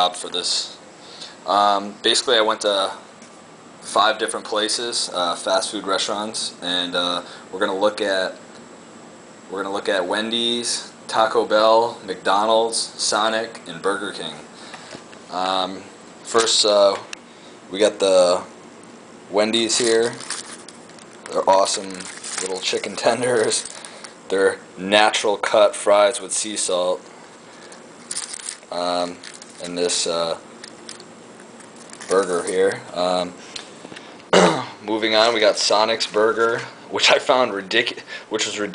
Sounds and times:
Speech: 0:00.0 - 0:00.8, 0:01.4 - 0:03.1, 0:03.8 - 0:08.4, 0:09.5 - 0:14.5, 0:15.3 - 0:17.1, 0:17.7 - 0:18.5, 0:19.3 - 0:20.2, 0:21.3 - 0:23.7, 0:24.3 - 0:27.1, 0:28.7 - 0:30.4, 0:32.1 - 0:33.4, 0:34.4 - 0:38.7.

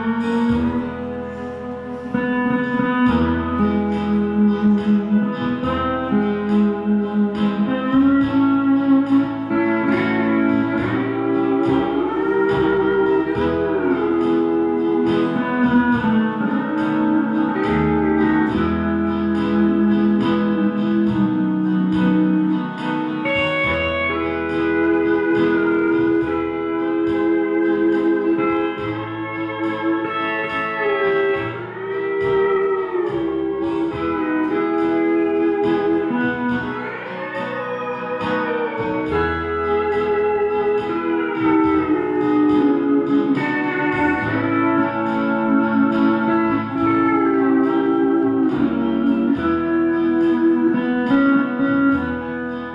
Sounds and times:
Guitar: 0:00.0 - 0:52.7.

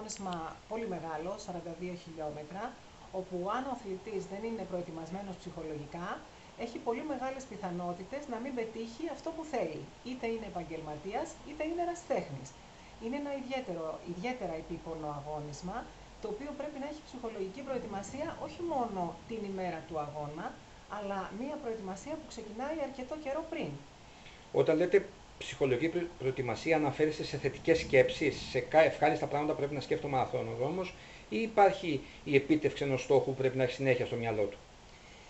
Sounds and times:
Speech: 0:00.0 - 0:23.8, 0:24.6 - 0:34.6
Inside, small room: 0:00.0 - 0:35.2.

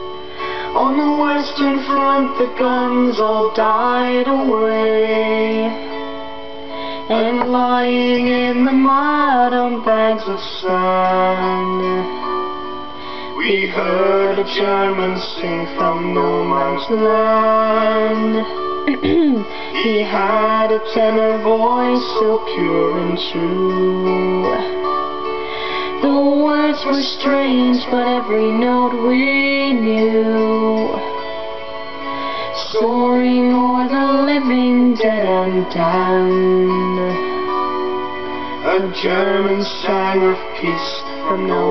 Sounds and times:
Music: 0:00.0 - 0:41.7
Male singing: 0:00.8 - 0:05.8, 0:07.1 - 0:12.2, 0:13.4 - 0:24.9, 0:25.9 - 0:31.1, 0:32.6 - 0:37.4, 0:38.6 - 0:41.7
Female singing: 0:18.9 - 0:19.4.

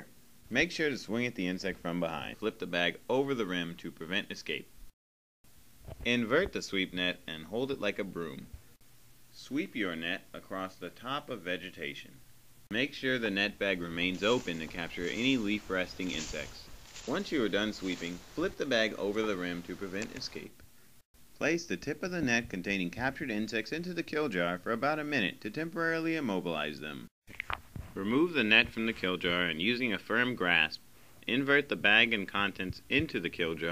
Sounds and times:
Speech: 0:00.0 - 0:04.7, 0:06.0 - 0:08.6, 0:09.4 - 0:20.6, 0:21.4 - 0:27.1, 0:28.0 - 0:33.7.

